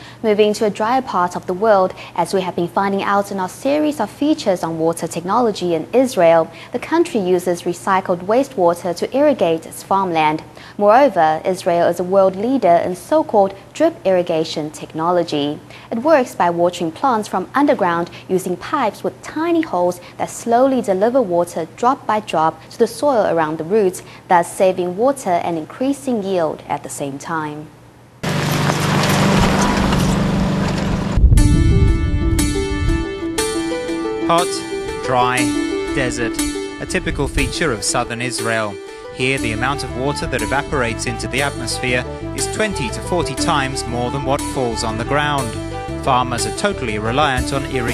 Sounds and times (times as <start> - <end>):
Speech: 0.2 - 27.7, 34.3 - 35.4, 36.0 - 36.3, 36.9 - 47.9
Music: 31.2 - 47.9.